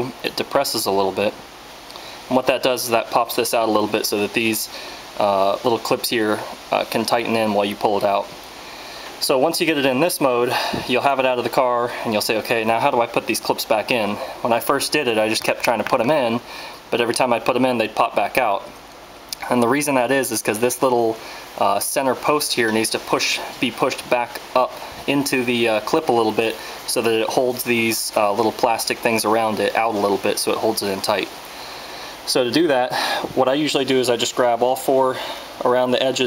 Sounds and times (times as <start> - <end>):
Speech: 0.0 - 1.4, 2.3 - 8.4, 9.2 - 18.7, 19.4 - 31.4, 32.3 - 36.2.